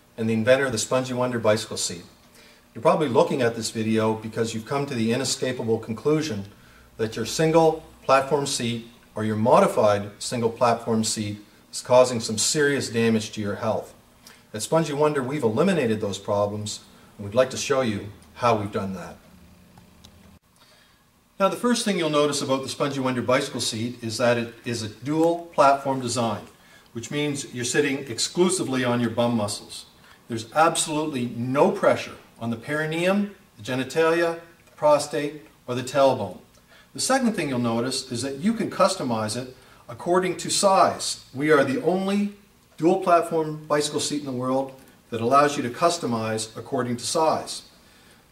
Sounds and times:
Speech: 0.2 - 2.2, 2.8 - 19.3, 21.4 - 47.7.

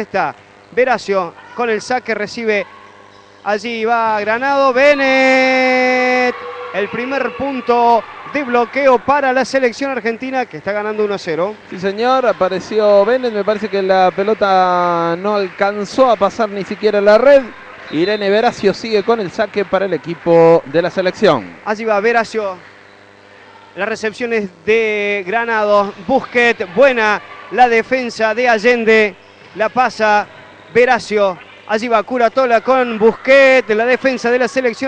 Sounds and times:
Speech: 3.5 - 22.6, 23.8 - 34.8.

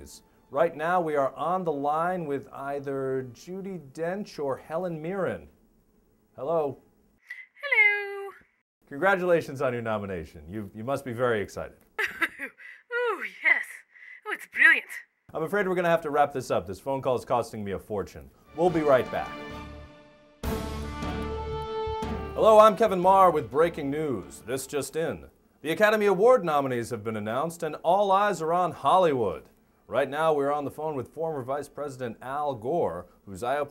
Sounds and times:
Speech: 0.0 - 5.5, 6.4 - 11.8, 12.9 - 19.3, 22.4 - 33.7
Music: 18.4 - 25.0.

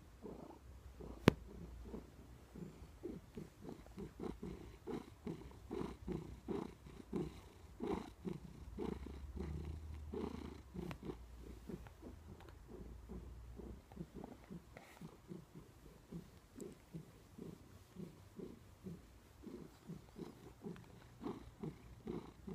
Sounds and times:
Inside, small room: 0.0 - 22.5
Purr: 0.2 - 22.5.

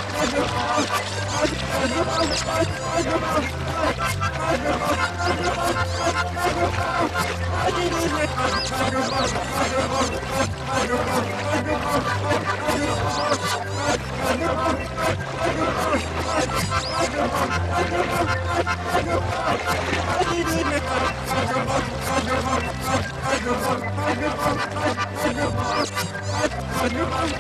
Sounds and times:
Music: 0.0 - 27.4.

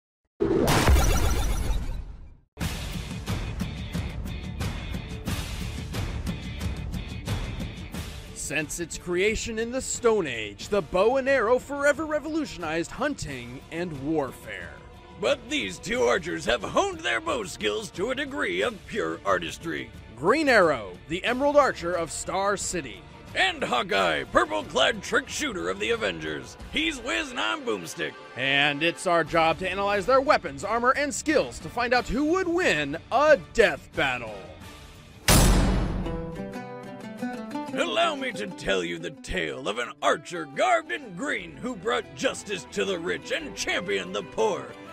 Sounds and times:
Music: 2.6 - 44.9
Speech: 8.4 - 34.6, 37.8 - 44.8.

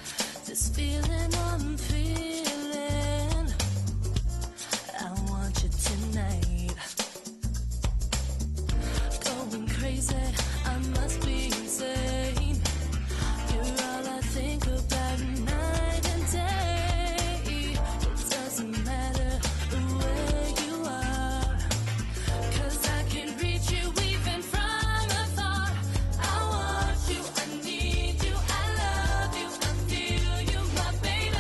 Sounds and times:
Music: 0.0 - 31.4.

